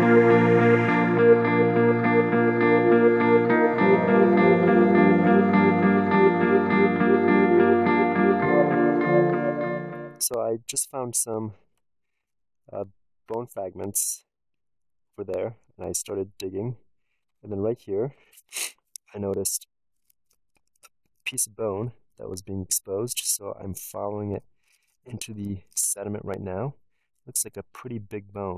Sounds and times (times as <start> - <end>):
Speech: 10.2 - 11.6, 12.7 - 14.3, 15.2 - 16.8, 17.4 - 19.6, 21.3 - 24.4, 25.1 - 28.5.